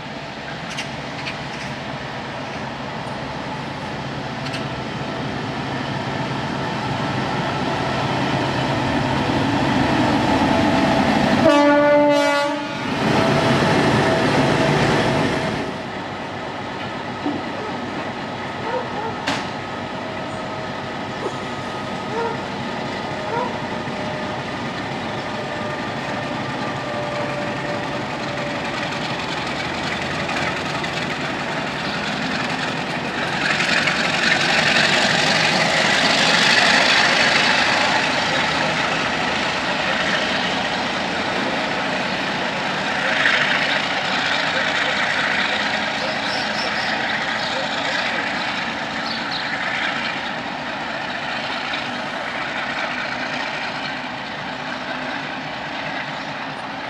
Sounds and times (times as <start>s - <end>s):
Train: 0.0s - 56.8s.